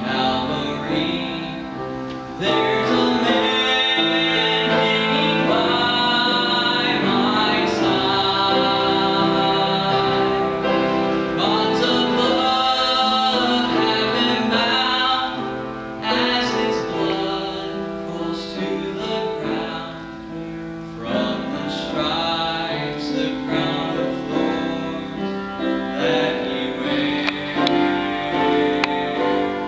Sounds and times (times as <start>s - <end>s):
Male singing: 0.0s - 20.4s, 21.0s - 29.6s
Music: 0.0s - 29.6s.